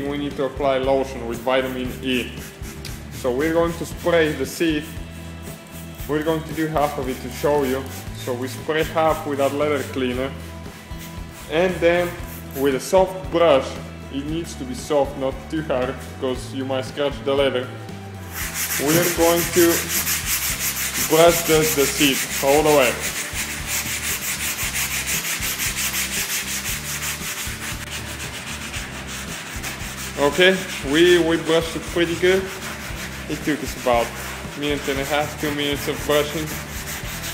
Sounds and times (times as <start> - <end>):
Speech: 0.0 - 2.4, 3.2 - 4.9, 6.1 - 10.4, 11.5 - 17.8, 18.8 - 19.9, 21.0 - 23.1, 30.2 - 32.5, 33.3 - 36.6
Music: 0.0 - 37.3.